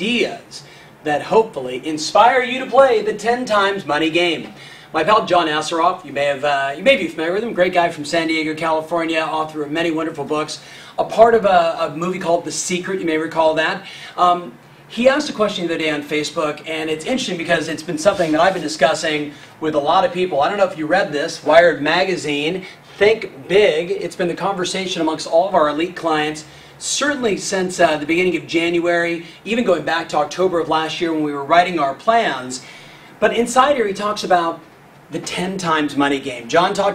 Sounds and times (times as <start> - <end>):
Speech: 0.0 - 32.6, 33.2 - 36.9.